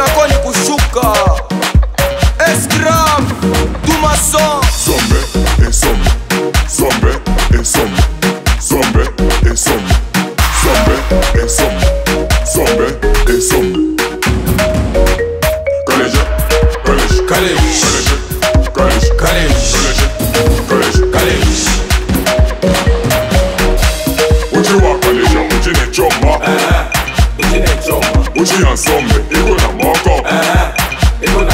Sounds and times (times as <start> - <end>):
Exciting music: 0.0 - 31.5.